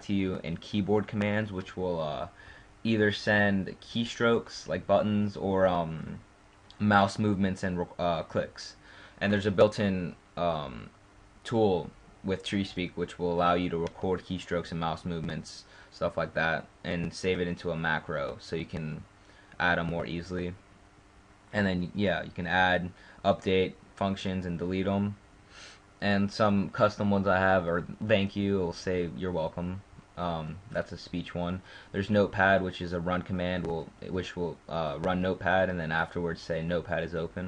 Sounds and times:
Male speech, man speaking: 0.0s - 6.2s, 6.8s - 20.6s, 21.5s - 25.2s, 26.0s - 37.4s
Narration, monologue: 0.0s - 37.4s.

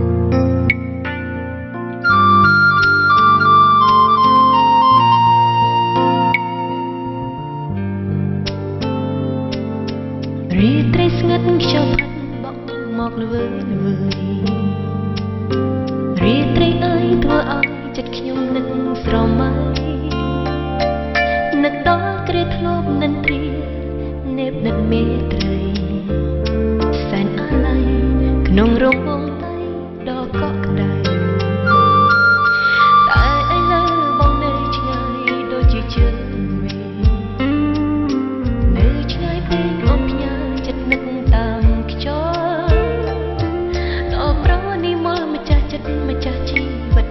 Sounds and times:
Music: 0.0s - 47.1s.

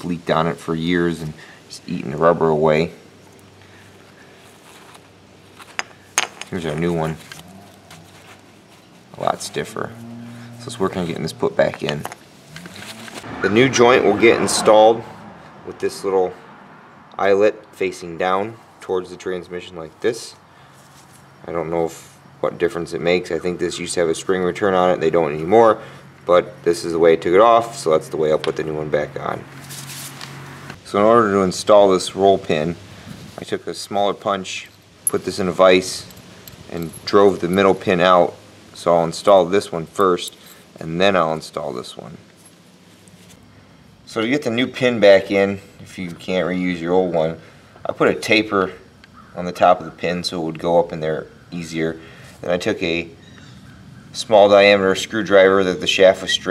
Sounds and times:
Speech: 0.0s - 3.0s, 6.5s - 7.3s, 9.2s - 10.0s, 10.6s - 12.1s, 13.3s - 15.1s, 15.7s - 16.4s, 17.2s - 20.4s, 21.4s - 29.4s, 30.8s - 32.8s, 33.4s - 36.1s, 36.7s - 42.2s, 44.1s - 48.8s, 49.4s - 53.2s, 54.2s - 56.5s
Outside, urban or manmade: 0.0s - 56.5s.

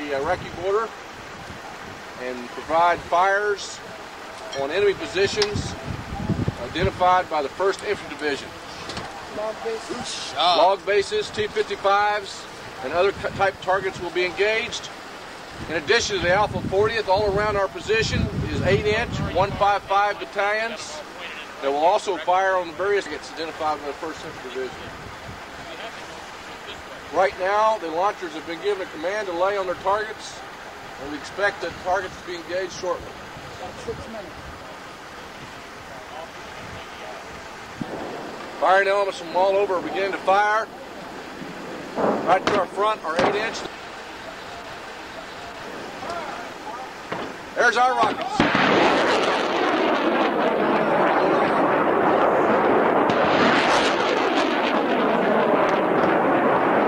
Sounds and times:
Speech: 0.0s - 0.9s, 2.2s - 8.5s, 9.1s - 14.9s, 15.7s - 25.0s, 25.6s - 30.4s, 31.0s - 34.4s, 38.6s - 40.7s, 42.3s - 47.0s, 47.6s - 48.5s
Outside, urban or manmade: 0.0s - 56.8s.

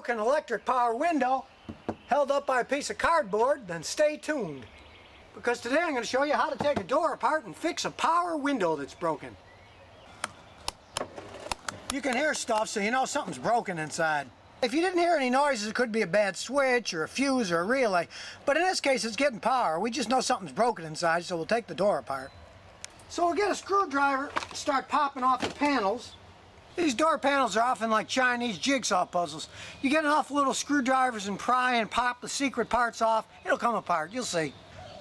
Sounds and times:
Speech: 0.0s - 1.5s, 2.1s - 4.7s, 5.4s - 9.4s, 11.9s - 22.3s, 23.1s - 26.2s, 26.8s - 34.6s.

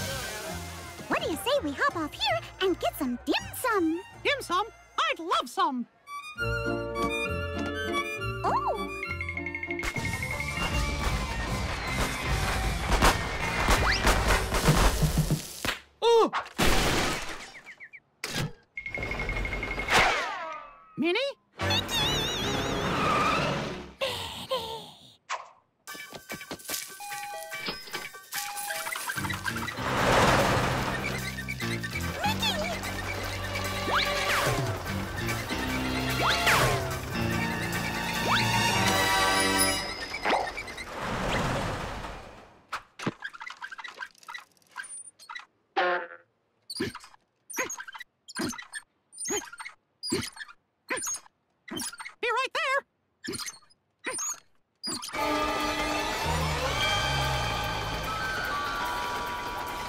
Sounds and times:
Music: 0.0s - 13.6s, 21.6s - 23.4s, 26.0s - 29.7s, 31.0s - 40.2s, 55.2s - 59.8s
Speech: 1.1s - 5.9s, 21.0s - 22.2s, 52.2s - 52.9s.

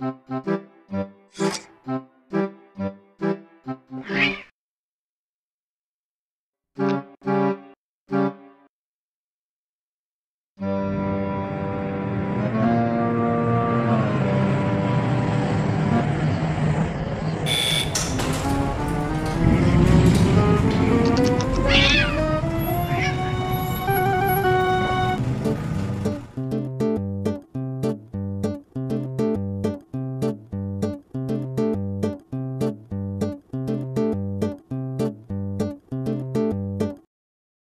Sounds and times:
Music: 0.0s - 4.2s, 6.8s - 8.7s, 10.6s - 16.3s, 18.2s - 37.1s.

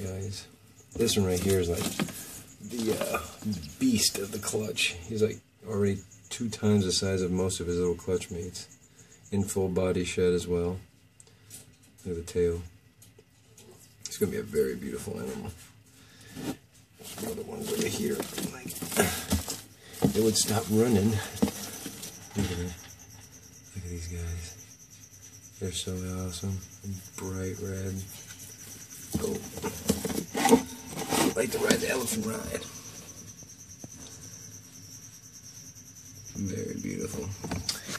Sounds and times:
Animal: 14.6s - 37.9s.

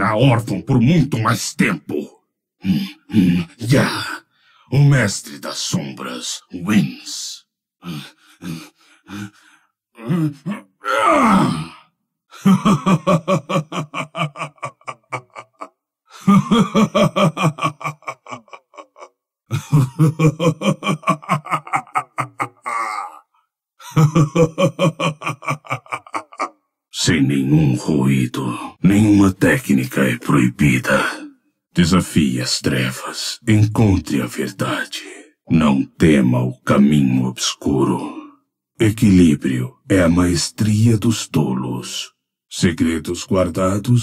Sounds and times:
Speech: 0.0s - 9.3s, 10.0s - 11.8s, 26.9s - 44.0s
Groan: 10.0s - 26.6s.

